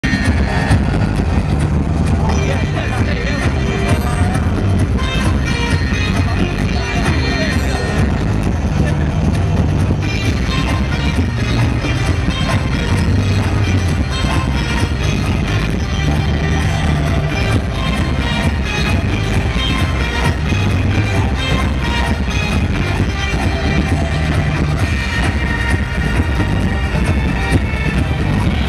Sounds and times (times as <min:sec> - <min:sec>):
Music: 0:00.0 - 0:28.6
Outside, urban or manmade: 0:00.0 - 0:28.6
Speech: 0:02.1 - 0:09.6.